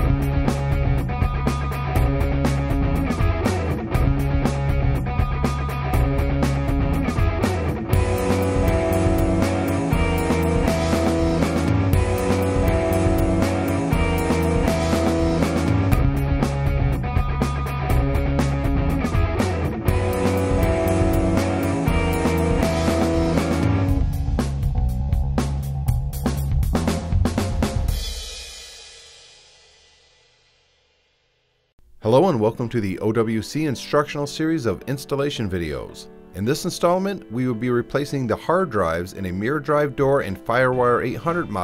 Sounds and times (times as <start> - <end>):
Music: 0.0 - 41.6.